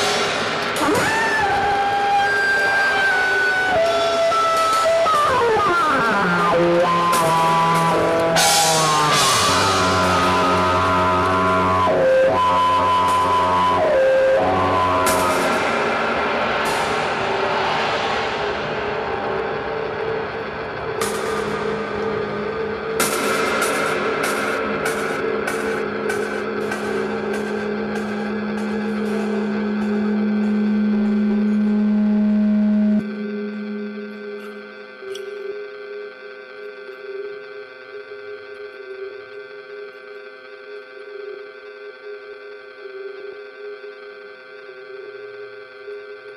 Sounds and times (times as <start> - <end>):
Inside, large room or hall: 0.0 - 35.4
Music: 0.0 - 46.3.